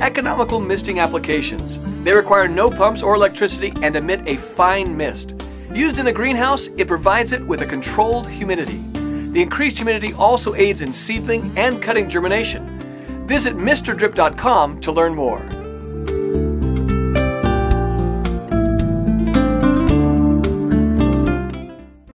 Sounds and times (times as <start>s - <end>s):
Speech: 0.0s - 8.8s, 9.4s - 12.6s, 13.3s - 15.6s
Music: 0.0s - 22.1s.